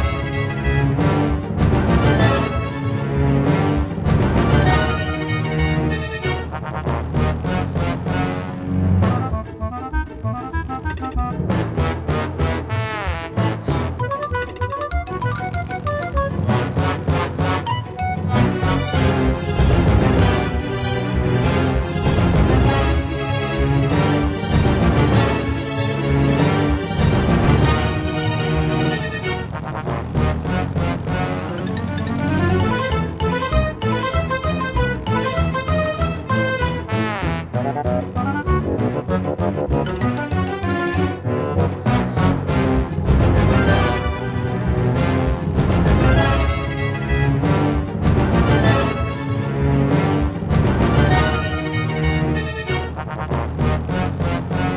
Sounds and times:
Funny music: 0.0 - 54.7.

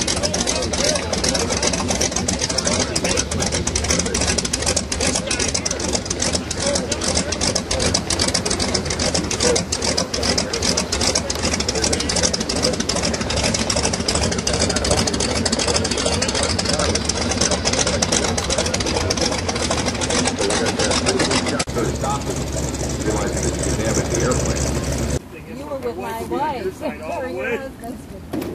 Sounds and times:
Speech: 0.0 - 13.6, 14.3 - 19.4, 20.2 - 22.4, 23.0 - 28.3
Aircraft: 0.0 - 25.2
Idling: 0.0 - 25.2.

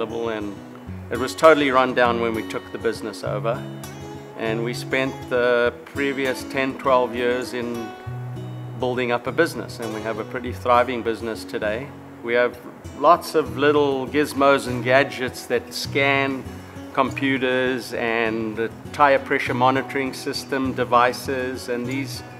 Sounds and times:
Speech: 0.0 - 3.6, 4.4 - 7.9, 8.8 - 22.3
Music: 0.0 - 22.3.

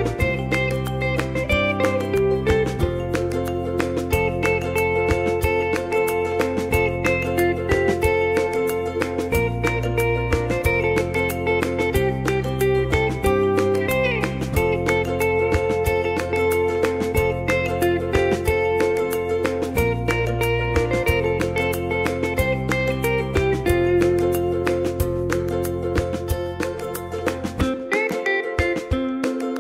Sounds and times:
Music: 0.0 - 29.6.

